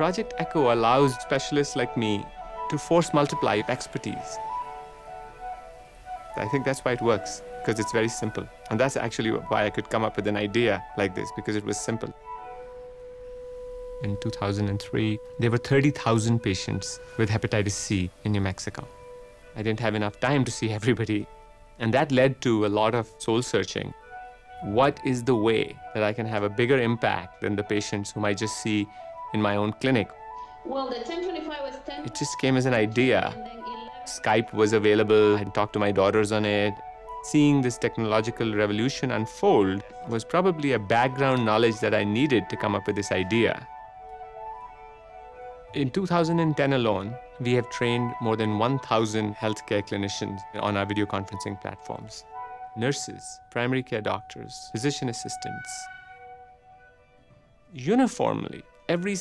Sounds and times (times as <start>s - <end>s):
Speech: 0.0s - 4.4s, 6.4s - 12.2s, 14.0s - 18.9s, 19.6s - 24.0s, 24.6s - 30.1s, 30.7s - 43.7s, 45.8s - 52.2s, 52.8s - 55.9s, 57.8s - 59.2s
Music: 0.0s - 59.2s.